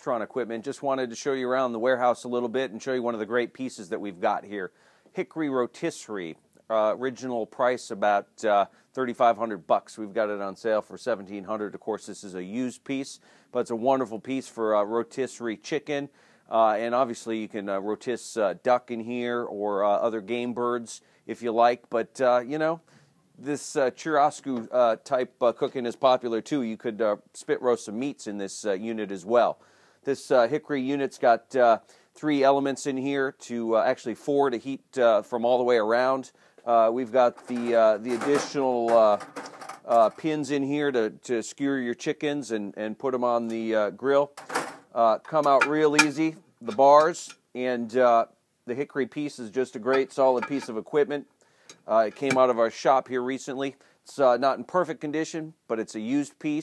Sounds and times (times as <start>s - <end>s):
Speech: 0.0s - 39.3s, 39.9s - 56.6s.